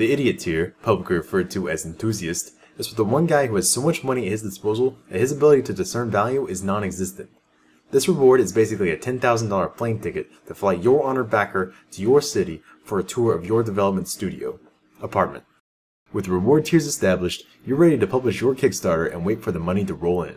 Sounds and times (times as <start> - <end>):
Speech: 0.0 - 7.3, 7.9 - 20.3.